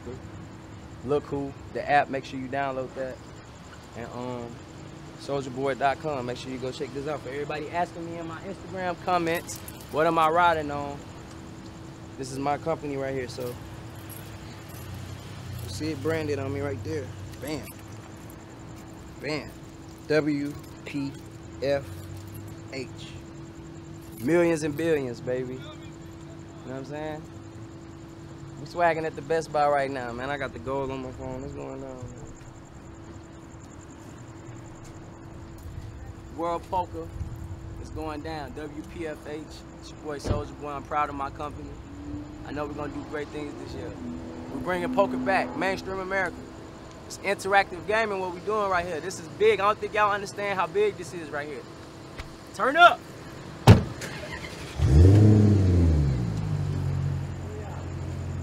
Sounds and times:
Outside, urban or manmade: 0.0 - 58.4
Speech: 1.0 - 3.2, 4.0 - 4.6, 5.2 - 11.0, 12.2 - 13.6, 15.7 - 17.7, 19.2 - 21.9, 22.7 - 23.2, 24.2 - 27.2, 28.6 - 32.3, 36.3 - 37.1, 37.8 - 41.8, 42.5 - 46.4, 47.1 - 51.6, 52.5 - 53.0, 57.4 - 57.9.

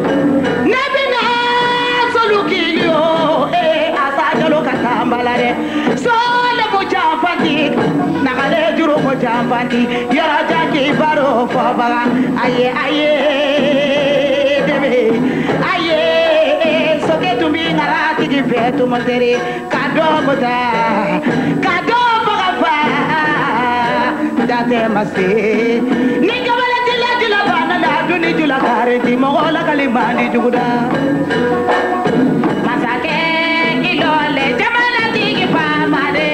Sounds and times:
Inside, large room or hall: 0.0 - 36.3
Music: 0.0 - 36.3.

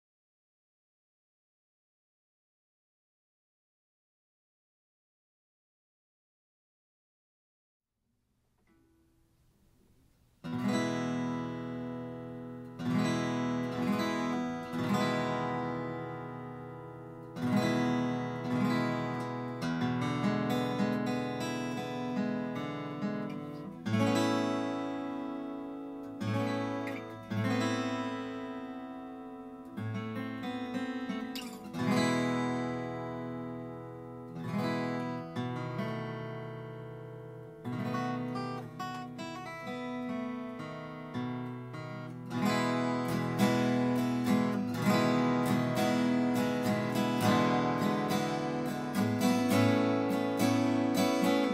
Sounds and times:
Acoustic guitar: 8.6 - 51.5.

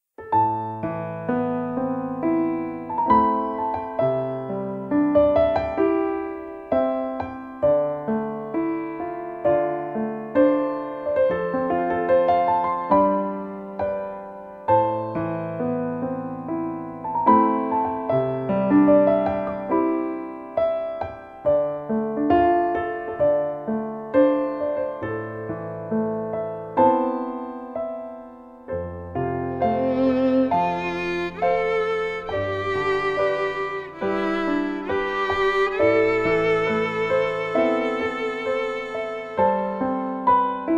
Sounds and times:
Violin, fiddle: 29.5 - 40.3.

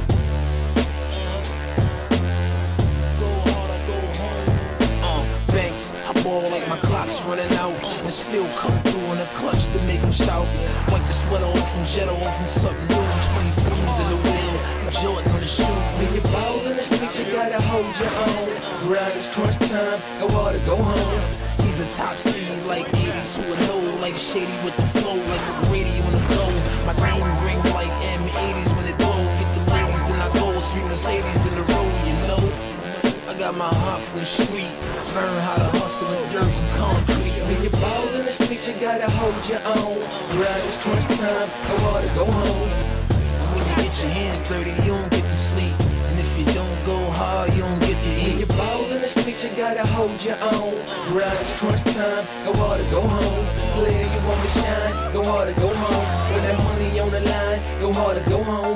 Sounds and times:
Music: 0.0 - 58.7.

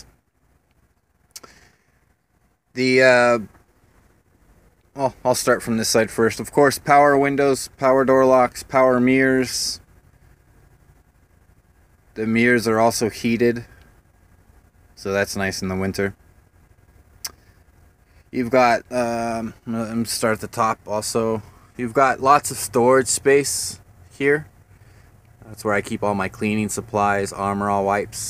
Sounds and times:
Speech: 2.8 - 3.5, 5.0 - 9.8, 12.2 - 13.7, 15.0 - 16.2, 18.4 - 24.5, 25.4 - 28.2.

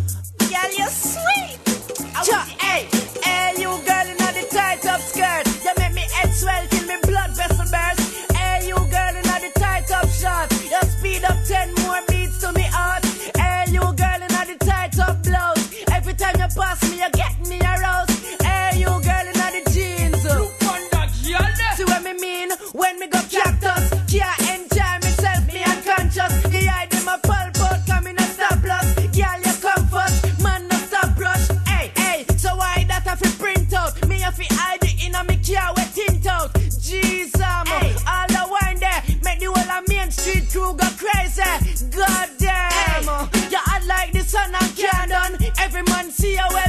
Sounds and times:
Afrobeat: 0.0 - 46.6.

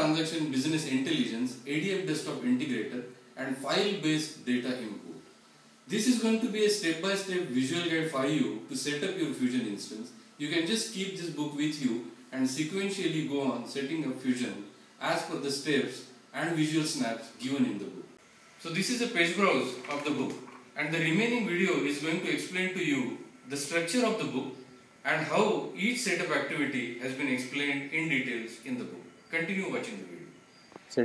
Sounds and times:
Speech: 0.0 - 5.3, 5.9 - 30.3.

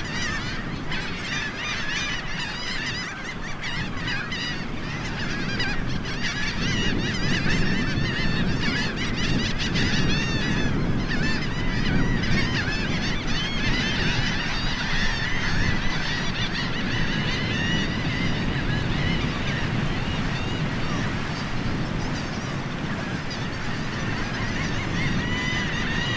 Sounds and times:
Bird: 0.0 - 26.1
Goose: 0.0 - 26.1
Outside, rural or natural: 0.0 - 26.1.

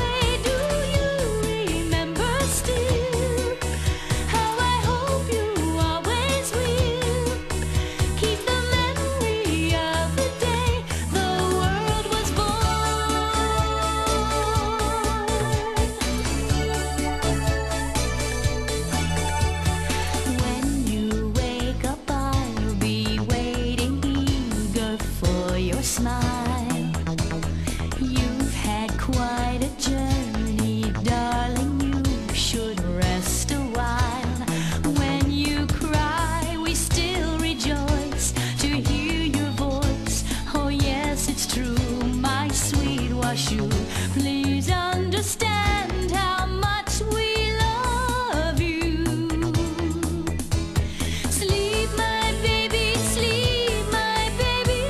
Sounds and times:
Music for children: 0.0 - 54.9.

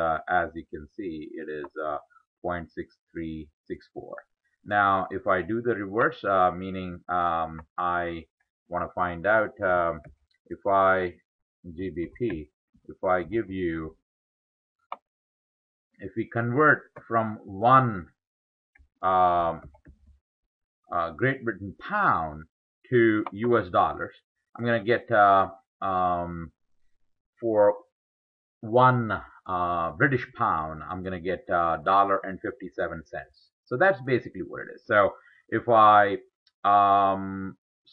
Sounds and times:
Speech: 0.0 - 14.0, 16.0 - 18.2, 19.0 - 19.7, 20.9 - 26.5, 27.4 - 27.9, 28.6 - 37.9.

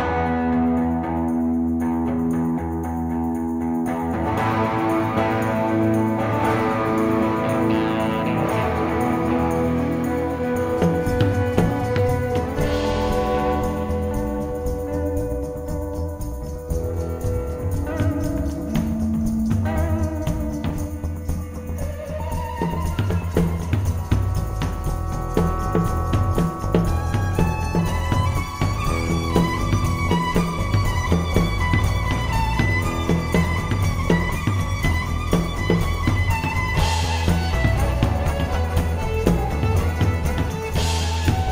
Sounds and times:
Music: 0.0 - 41.5.

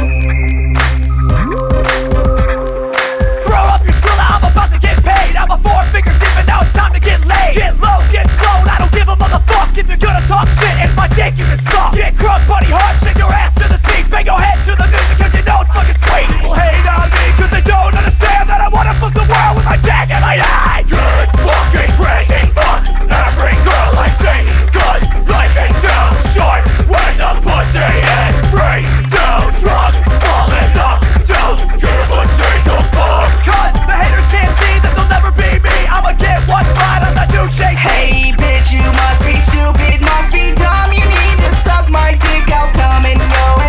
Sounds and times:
Music: 0.0 - 43.6.

